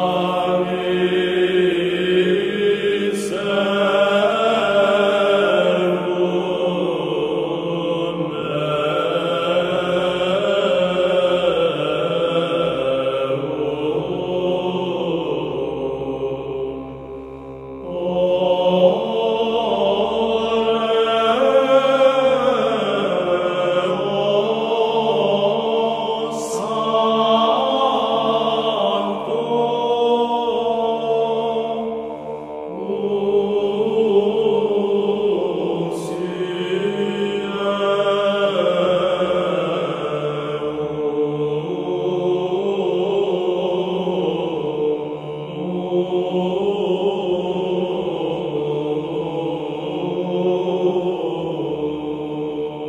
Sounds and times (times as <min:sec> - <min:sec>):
Mantra: 0:00.0 - 0:17.0, 0:17.7 - 0:52.8.